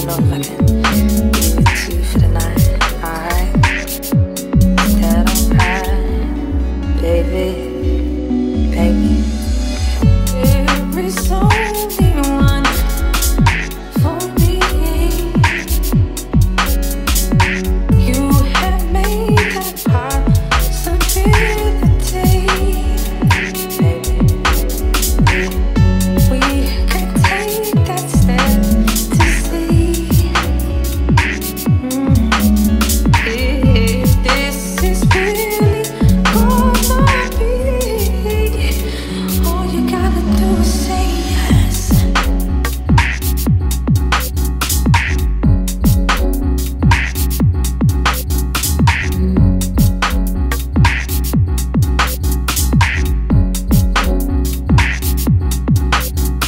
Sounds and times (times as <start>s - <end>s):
Music: 0.0s - 56.4s.